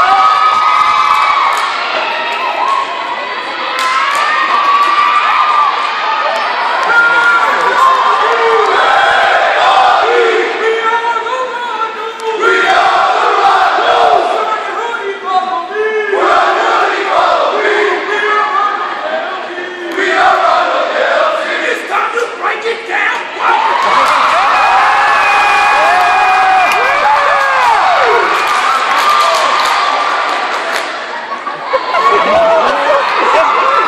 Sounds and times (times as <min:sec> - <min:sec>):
Crowd: 0:00.0 - 0:33.8
Battle cry: 0:06.8 - 0:10.8, 0:12.4 - 0:14.7, 0:16.1 - 0:22.4.